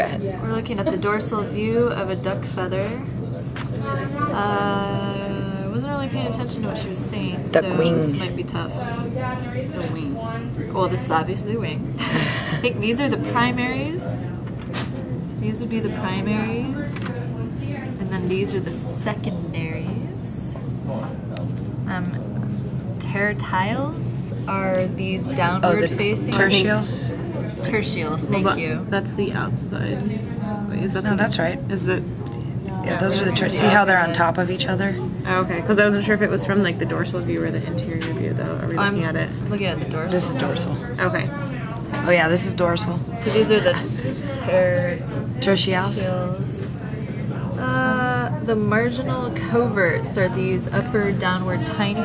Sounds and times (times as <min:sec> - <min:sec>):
Speech: 0:00.0 - 0:14.4, 0:23.0 - 0:52.0.